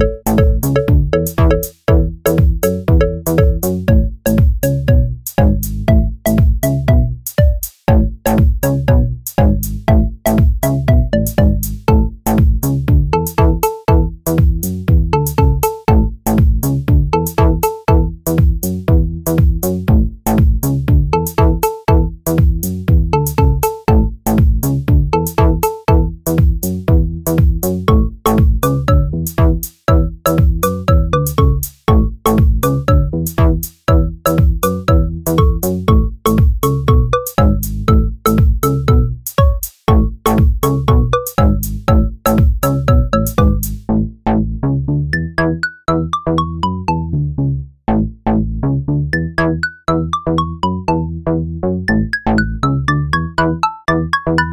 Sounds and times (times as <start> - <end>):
Music: 0.0 - 54.5.